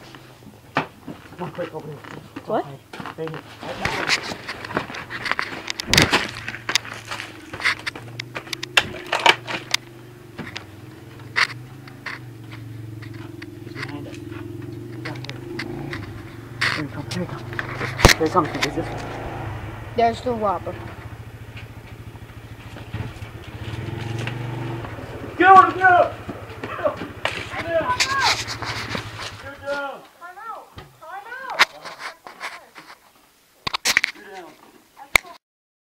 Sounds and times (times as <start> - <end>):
Vehicle: 0.0 - 30.0
Outside, rural or natural: 0.0 - 35.4.